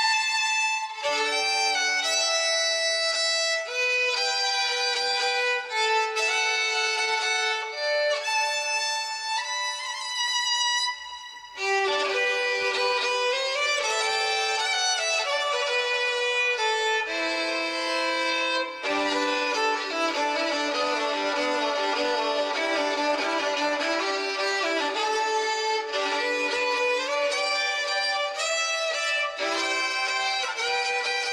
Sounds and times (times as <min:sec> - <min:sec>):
Violin, fiddle: 0:00.0 - 0:31.3.